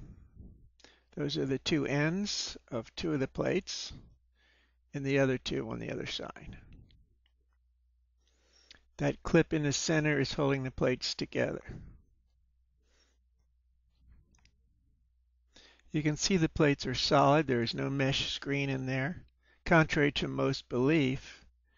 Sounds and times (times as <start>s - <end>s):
Speech: 1.2s - 4.1s, 5.0s - 6.7s, 9.0s - 11.9s, 15.9s - 21.4s.